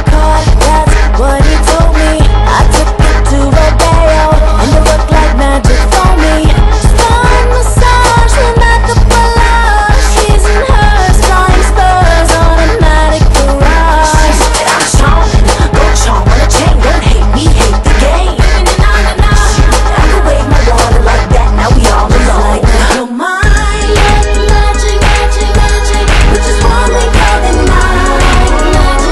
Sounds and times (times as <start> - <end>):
Music: 0.0 - 29.1.